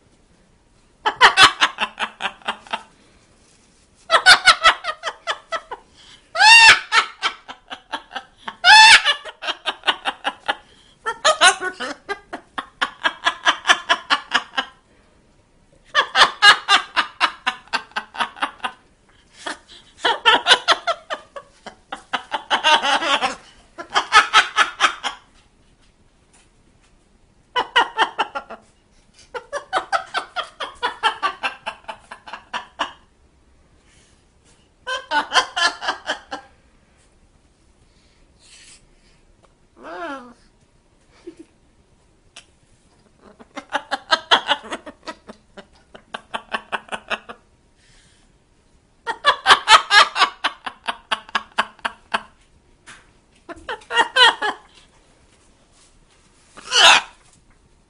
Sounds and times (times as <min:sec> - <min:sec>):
Laughter: 0:01.0 - 0:02.9, 0:04.1 - 0:05.8, 0:06.4 - 0:14.8, 0:15.9 - 0:25.4, 0:27.5 - 0:33.1, 0:34.8 - 0:36.5, 0:41.1 - 0:41.5, 0:43.2 - 0:47.4, 0:49.1 - 0:52.4, 0:53.5 - 0:54.8
Domestic animals, pets: 0:39.8 - 0:40.5, 0:56.6 - 0:57.4.